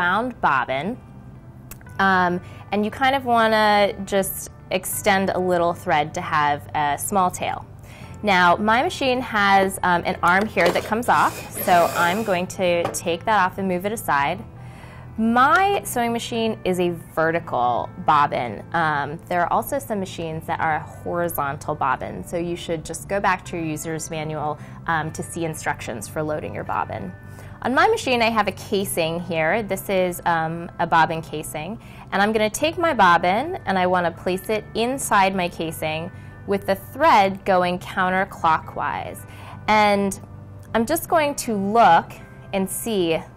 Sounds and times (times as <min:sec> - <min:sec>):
Speech: 0:15.2 - 0:39.1, 0:40.8 - 0:43.2.